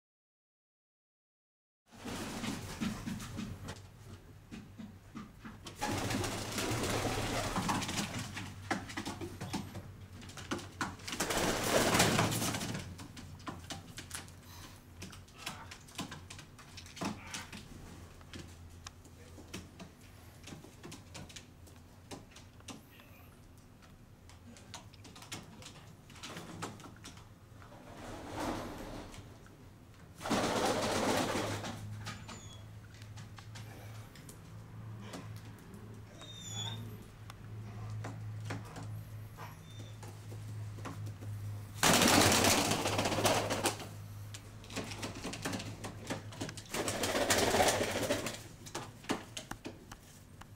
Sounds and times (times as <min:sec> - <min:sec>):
Inside, small room: 0:01.9 - 0:50.5.